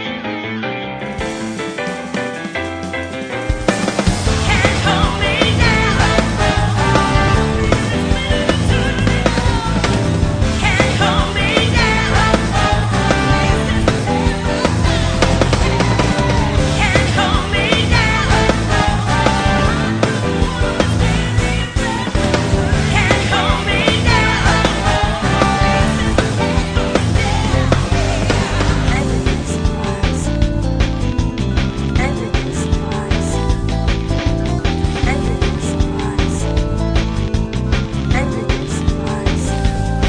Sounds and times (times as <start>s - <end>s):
Music: 0.0s - 40.0s.